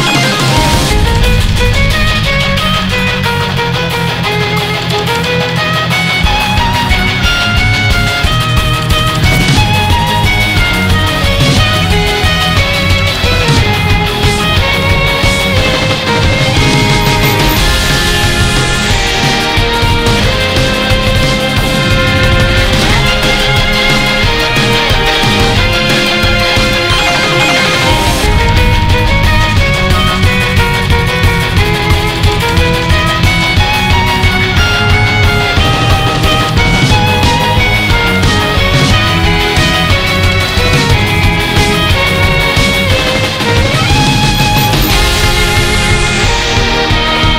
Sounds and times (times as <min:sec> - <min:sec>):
Music: 0:00.0 - 0:47.3.